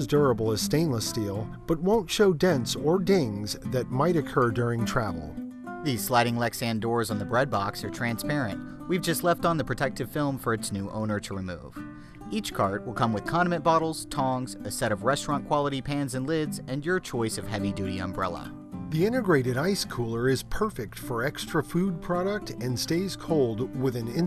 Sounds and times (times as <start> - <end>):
Music: 0.0 - 24.2
Speech: 0.0 - 24.2.